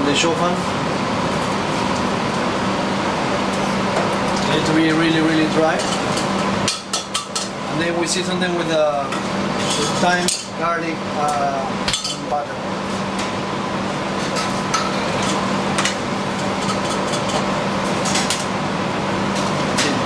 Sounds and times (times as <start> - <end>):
Speech: 0.0 - 0.7, 4.4 - 5.9, 7.7 - 9.2, 9.8 - 12.6.